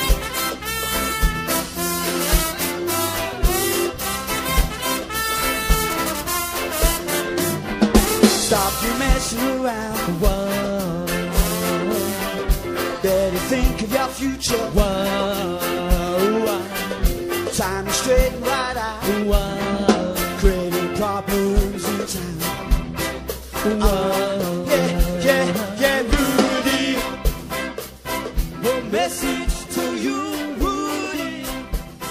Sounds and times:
Musical instrument: 0.0 - 32.1
Ska: 0.0 - 32.1
Singing: 8.4 - 12.3, 13.0 - 22.6, 23.6 - 27.3, 28.6 - 31.7.

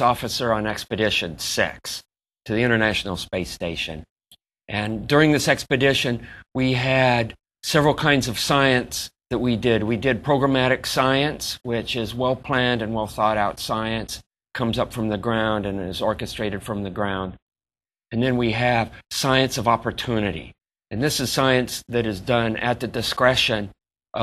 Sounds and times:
Speech: 0.0 - 4.1, 4.7 - 17.4, 18.1 - 24.2.

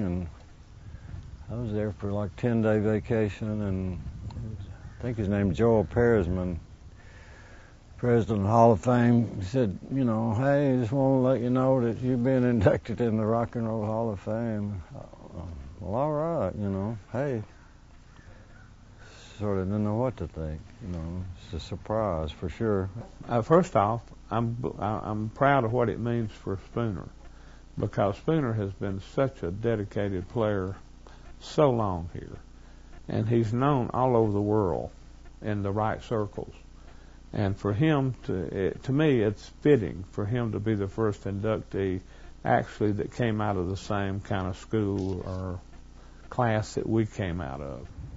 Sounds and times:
Speech: 0.0 - 0.4, 1.4 - 6.7, 8.0 - 17.6, 19.1 - 27.2, 27.8 - 30.8, 31.4 - 32.5, 33.1 - 36.7, 37.3 - 45.7, 46.3 - 47.9.

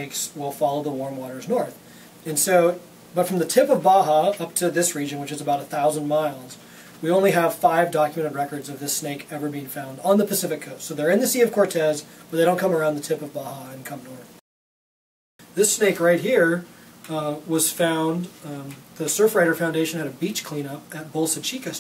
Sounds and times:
Speech: 0.0 - 14.4, 15.6 - 21.8.

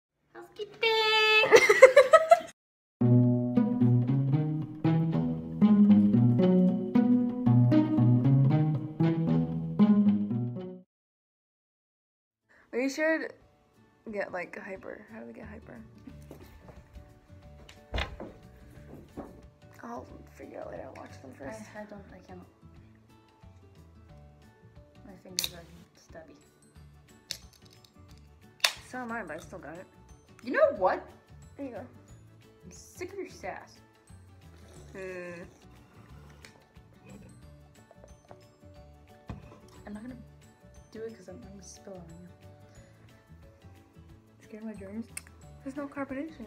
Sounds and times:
Speech: 0.3 - 1.6
Music: 3.0 - 10.9, 12.5 - 46.4.

